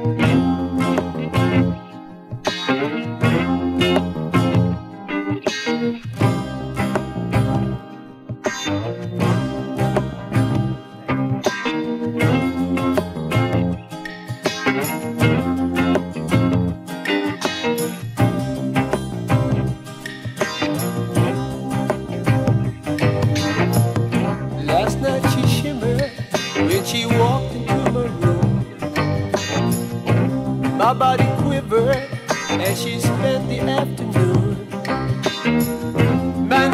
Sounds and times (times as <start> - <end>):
Music: 0.0 - 36.7.